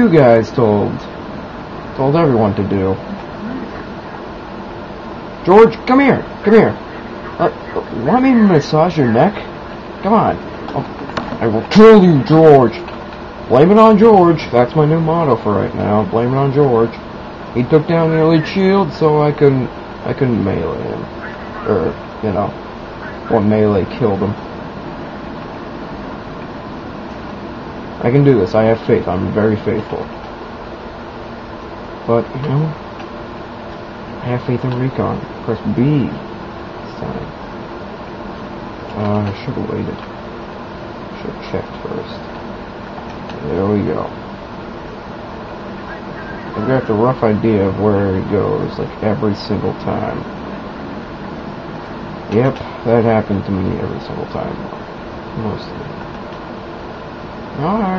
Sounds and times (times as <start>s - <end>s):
Speech: 0.0s - 1.1s, 2.0s - 3.8s, 5.4s - 6.8s, 7.4s - 12.9s, 13.5s - 17.0s, 17.6s - 21.1s, 21.7s - 22.6s, 23.3s - 24.4s, 28.0s - 30.1s, 32.1s - 32.8s, 34.2s - 36.2s, 36.9s - 37.4s, 39.0s - 40.0s, 41.2s - 42.3s, 43.4s - 44.2s, 46.5s - 50.3s, 52.3s - 54.7s, 55.4s - 56.0s, 57.6s - 57.9s.